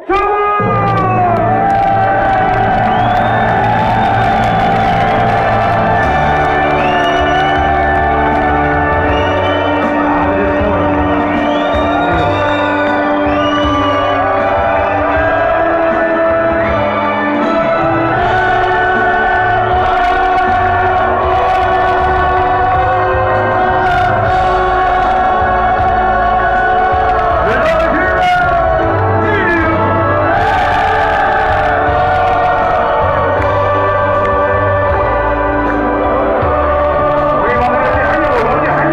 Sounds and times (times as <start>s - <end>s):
Music: 0.0s - 38.9s.